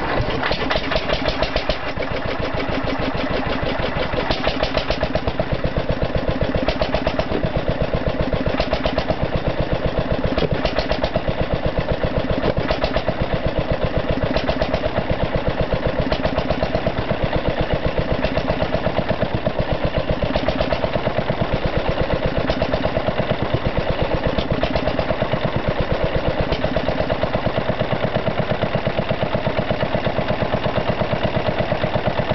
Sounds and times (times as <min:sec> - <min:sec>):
Heavy engine (low frequency): 0:00.0 - 0:32.3
Idling: 0:00.0 - 0:32.3
Medium engine (mid frequency): 0:00.0 - 0:32.3.